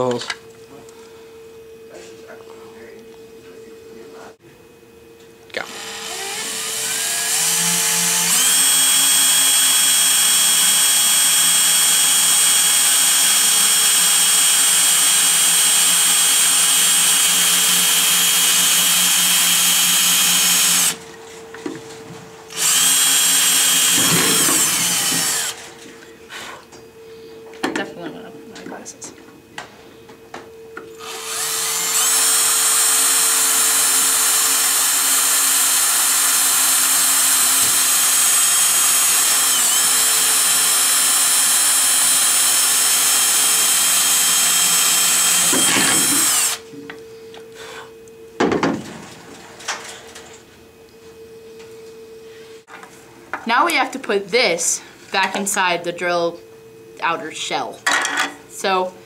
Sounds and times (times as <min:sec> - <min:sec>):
Speech: 0:00.0 - 0:00.9, 0:01.9 - 0:04.4, 0:27.7 - 0:29.2, 0:53.4 - 0:56.4, 0:57.0 - 0:57.8, 0:58.6 - 0:59.0
Drill: 0:05.6 - 0:21.0, 0:22.5 - 0:25.7, 0:31.0 - 0:46.7.